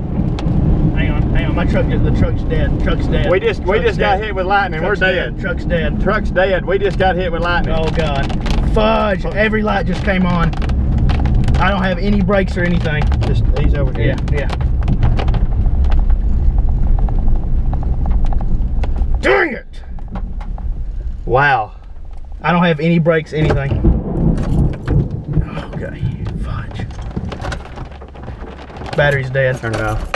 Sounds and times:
Car: 0.0 - 30.1
Speech: 1.0 - 10.5, 11.6 - 14.6, 22.4 - 23.8, 25.5 - 26.9, 29.0 - 30.1.

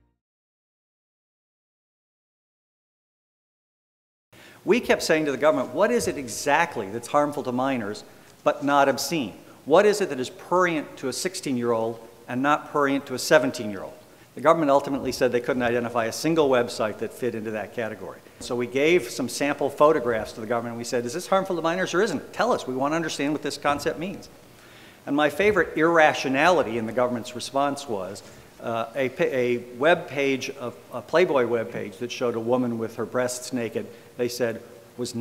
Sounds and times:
Narration, monologue: 4.4 - 35.2
Male speech, man speaking: 4.7 - 24.3, 25.1 - 35.2.

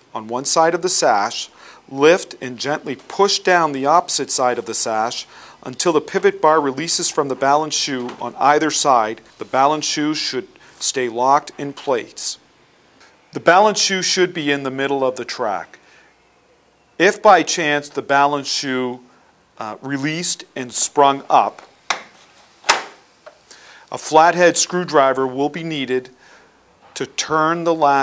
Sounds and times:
Speech: 0.2 - 12.4, 13.3 - 15.8, 17.0 - 21.6, 23.9 - 26.2, 27.0 - 28.0.

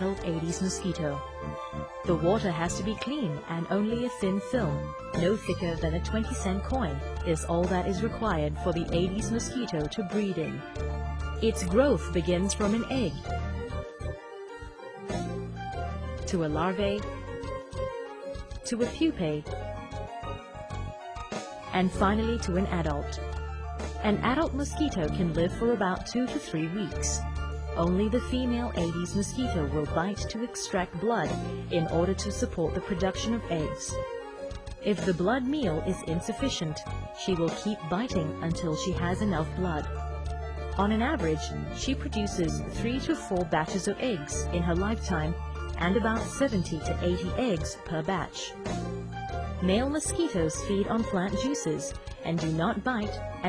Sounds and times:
Speech: 0.0 - 1.2, 2.1 - 10.7, 11.4 - 13.3, 16.3 - 17.1, 18.7 - 19.6, 21.8 - 23.2, 24.0 - 27.2, 27.8 - 34.0, 34.9 - 39.9, 40.8 - 48.6, 49.6 - 53.4
Music: 0.0 - 53.4.

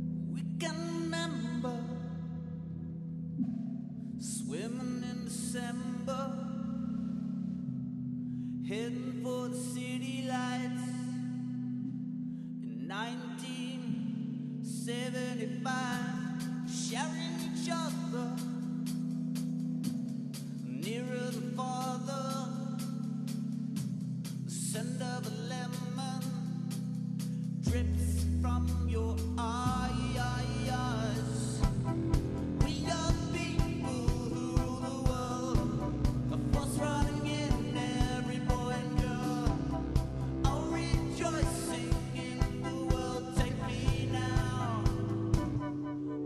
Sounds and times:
Music: 0.0 - 46.2.

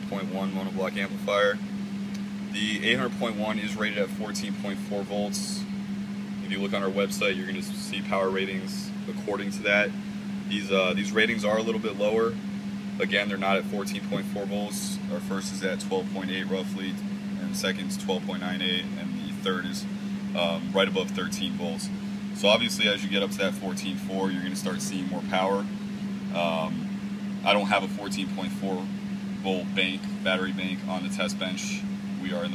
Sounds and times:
Speech: 0.0 - 1.6, 2.5 - 5.7, 6.4 - 12.4, 13.0 - 25.7, 26.3 - 32.5.

